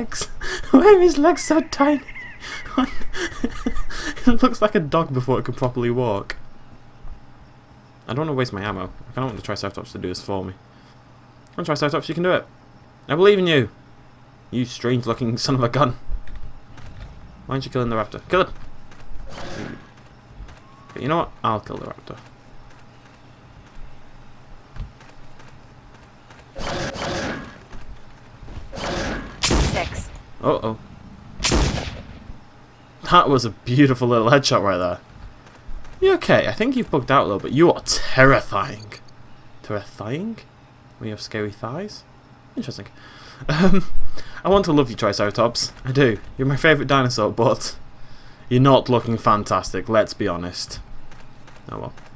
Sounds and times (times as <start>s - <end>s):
Speech: 0.0s - 2.0s, 21.0s - 22.2s, 29.7s - 30.8s, 33.0s - 35.0s, 36.0s - 39.0s, 39.6s - 42.9s, 44.4s - 47.8s, 48.5s - 50.8s, 51.7s - 52.0s
Fusillade: 26.6s - 27.6s, 28.7s - 30.1s, 31.4s - 32.2s.